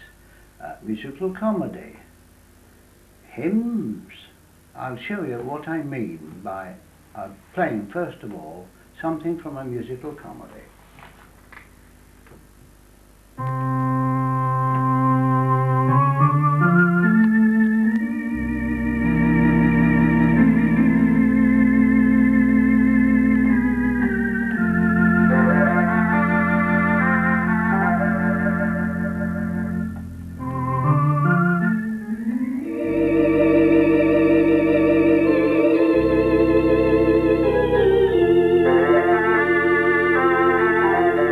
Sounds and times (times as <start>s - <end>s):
Organ: 13.3s - 41.3s
Piano: 13.4s - 41.3s.